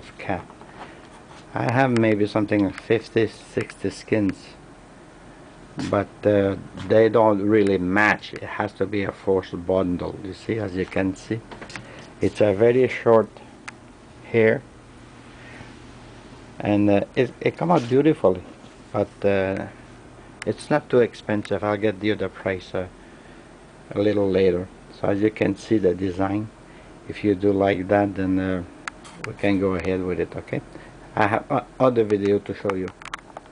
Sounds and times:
Speech: 0.0s - 0.5s, 1.5s - 4.6s, 5.8s - 11.5s, 12.2s - 13.4s, 14.2s - 14.7s, 16.6s - 19.8s, 20.4s - 23.0s, 23.9s - 33.0s.

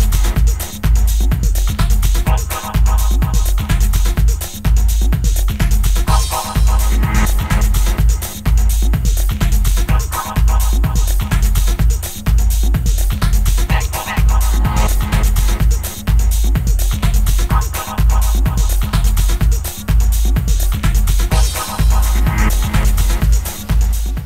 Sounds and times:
Music: 0.0s - 24.2s.

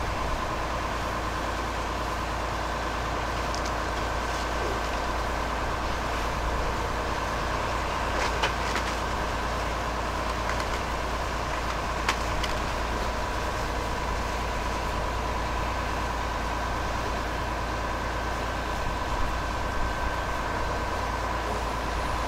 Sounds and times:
Vehicle: 0.0s - 22.2s.

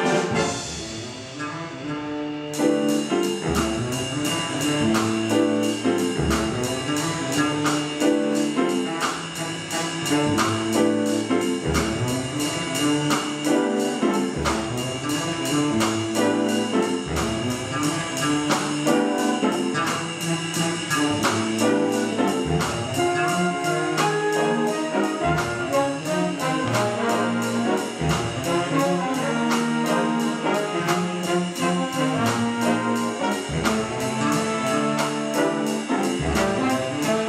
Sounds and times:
Inside, large room or hall: 0.0s - 37.2s
Jazz: 0.0s - 37.2s
Orchestra: 0.0s - 37.2s.

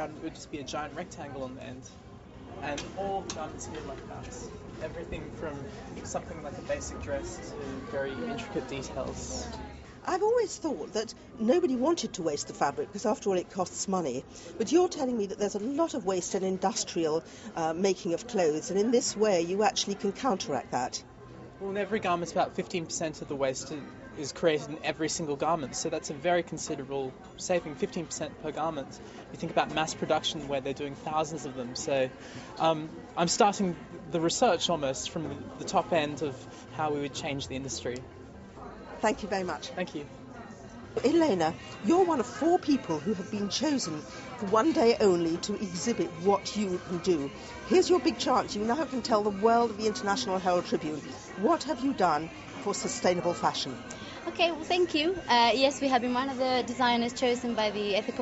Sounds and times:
Female speech, woman speaking: 9.4s - 21.0s, 39.0s - 40.0s, 41.0s - 58.2s.

